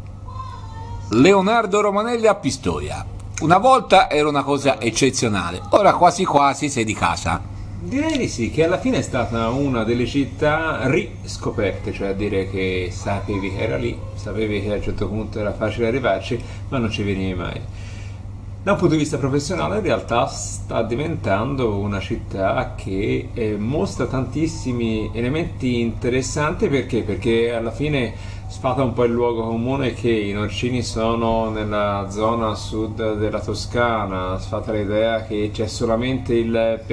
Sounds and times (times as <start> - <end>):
Speech: 0.3 - 17.7, 18.7 - 36.9.